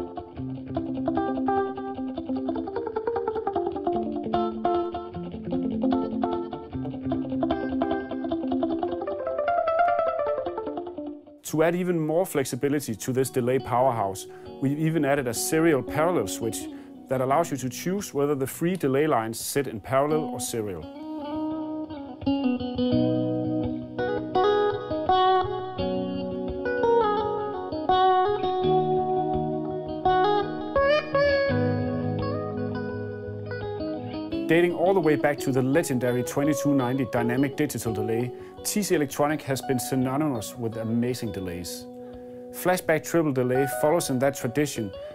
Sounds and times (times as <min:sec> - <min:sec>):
Guitar: 0:00.0 - 0:45.1
Speech: 0:11.4 - 0:20.9, 0:34.5 - 0:41.9, 0:42.6 - 0:45.0.